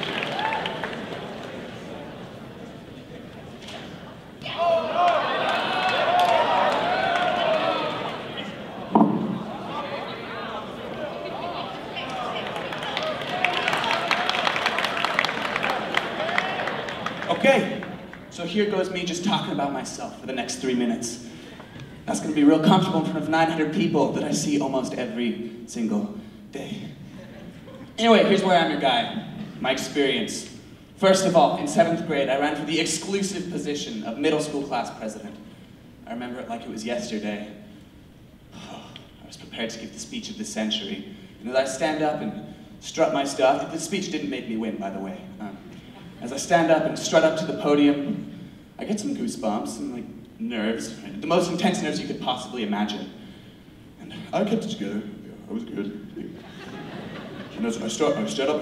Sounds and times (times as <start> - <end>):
Narration, monologue: 17.2 - 58.6
Male speech, man speaking: 17.3 - 21.3, 22.1 - 27.0, 28.0 - 35.4, 36.0 - 37.6, 39.2 - 45.6, 46.2 - 48.2, 48.8 - 53.2, 54.0 - 56.4, 57.5 - 58.6.